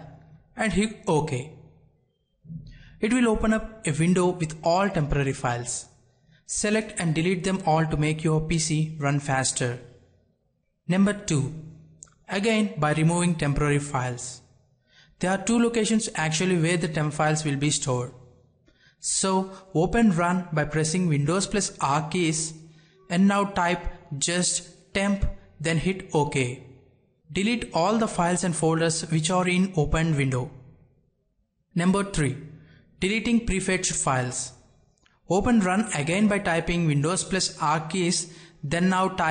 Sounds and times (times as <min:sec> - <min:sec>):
Speech: 0:00.0 - 0:01.6, 0:02.5 - 0:05.9, 0:06.5 - 0:09.9, 0:10.9 - 0:11.6, 0:12.2 - 0:14.4, 0:15.2 - 0:18.2, 0:19.0 - 0:26.6, 0:27.3 - 0:30.5, 0:31.7 - 0:32.4, 0:33.0 - 0:34.6, 0:35.3 - 0:39.3.